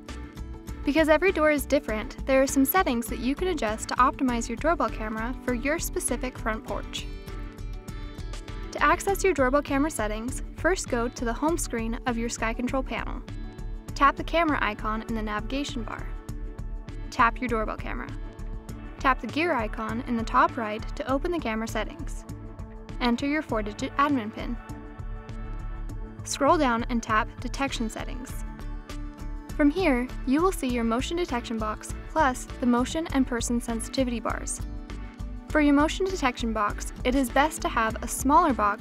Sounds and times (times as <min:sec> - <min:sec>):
Music: 0:00.0 - 0:38.8
Speech: 0:00.9 - 0:07.1, 0:08.8 - 0:13.2, 0:14.0 - 0:16.1, 0:17.2 - 0:18.2, 0:19.0 - 0:22.2, 0:23.0 - 0:24.6, 0:26.3 - 0:28.4, 0:29.6 - 0:34.6, 0:35.5 - 0:38.8.